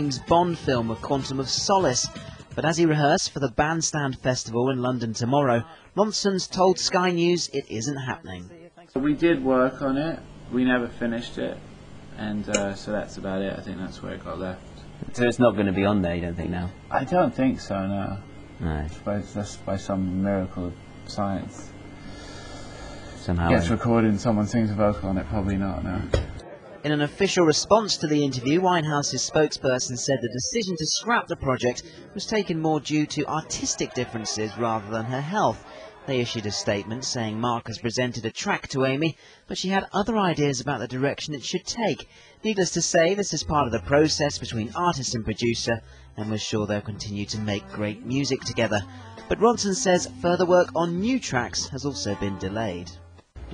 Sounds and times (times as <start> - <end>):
Speech: 0.0 - 11.6, 12.2 - 21.7, 23.2 - 26.1, 26.8 - 53.0.